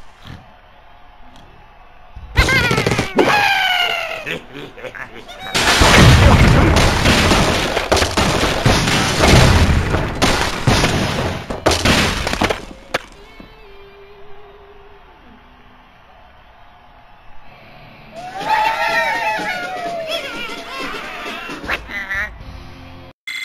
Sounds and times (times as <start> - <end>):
Gunshot, gunfire: 5.6 - 13.1.